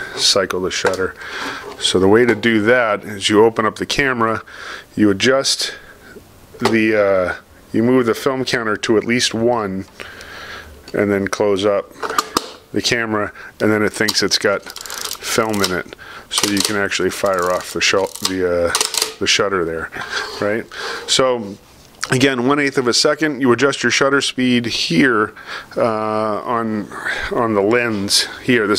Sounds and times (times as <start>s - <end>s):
Speech: 0.0s - 1.2s, 1.8s - 5.8s, 6.6s - 9.9s, 10.9s - 11.9s, 12.7s - 28.7s.